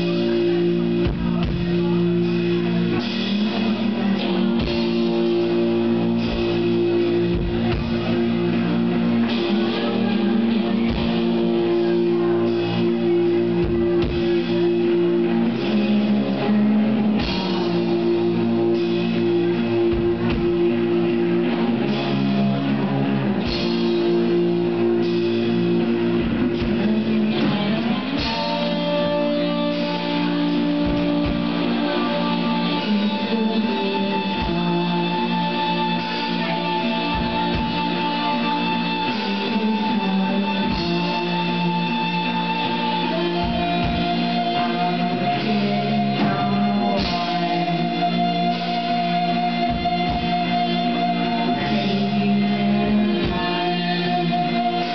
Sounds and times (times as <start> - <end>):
Inside, large room or hall: 0.0 - 54.9
Music: 0.0 - 54.9.